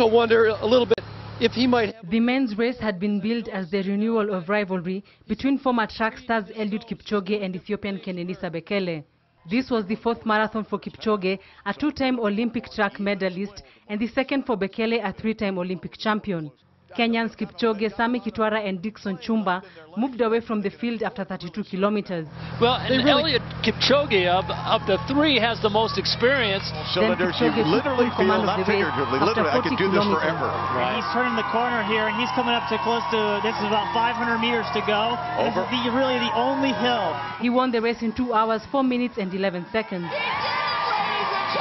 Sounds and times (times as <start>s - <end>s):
Speech: 0.0s - 40.1s
Outside, urban or manmade: 0.0s - 41.6s.